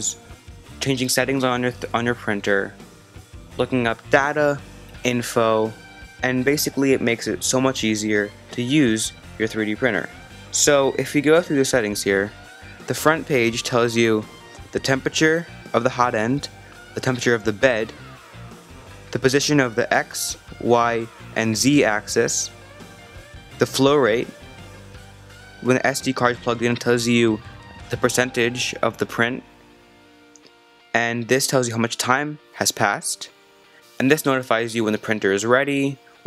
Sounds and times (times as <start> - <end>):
Music: 0.0 - 36.2
Speech: 0.8 - 2.8, 3.6 - 18.0, 19.1 - 22.5, 23.6 - 24.3, 25.6 - 29.4, 31.0 - 33.4, 34.0 - 36.0.